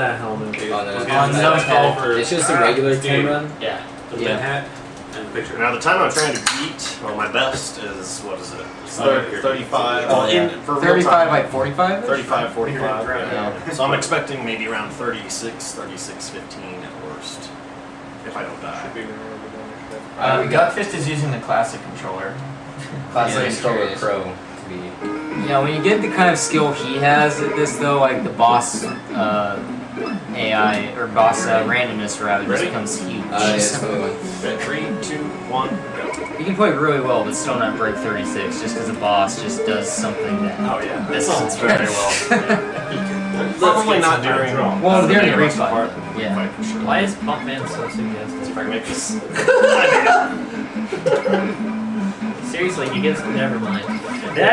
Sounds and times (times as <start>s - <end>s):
Music: 0.0s - 3.4s, 5.4s - 15.9s, 19.7s - 54.5s
Speech: 0.0s - 17.6s, 18.2s - 50.3s, 52.4s - 54.5s.